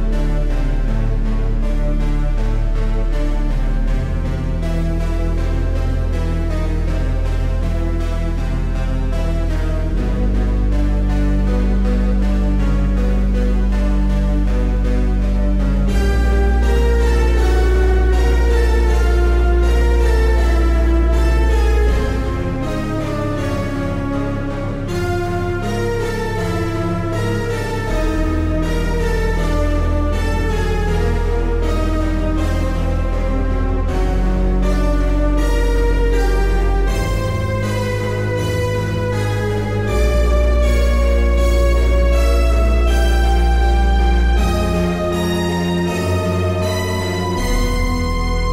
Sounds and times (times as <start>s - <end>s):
Synthesizer: 0.0s - 48.5s.